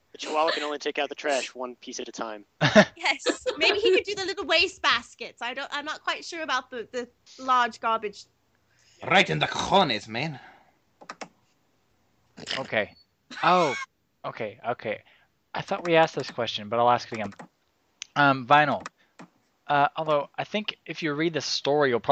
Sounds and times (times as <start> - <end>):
Speech: 0.2 - 2.4, 3.0 - 5.1, 12.5 - 15.0, 19.7 - 22.1.